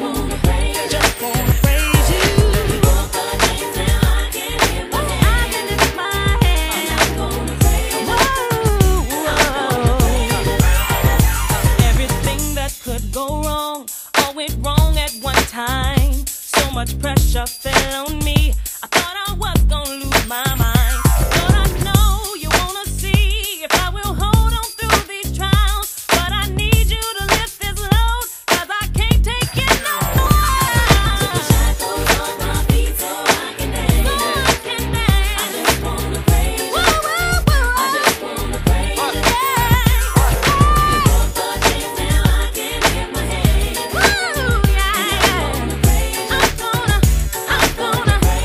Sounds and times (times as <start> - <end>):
Exciting music: 0.0 - 12.5, 20.2 - 22.2, 29.5 - 48.4
Rhythm and blues: 0.0 - 48.4.